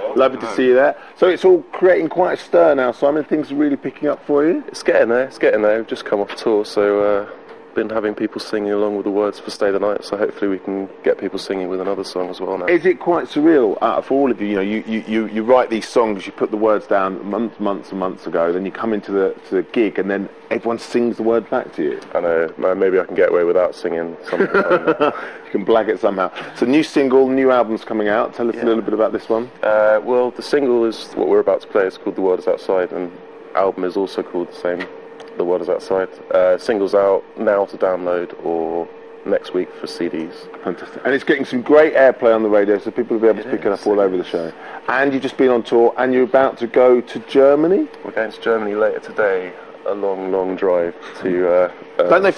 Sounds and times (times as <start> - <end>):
Speech: 0.0 - 24.6, 25.5 - 52.3.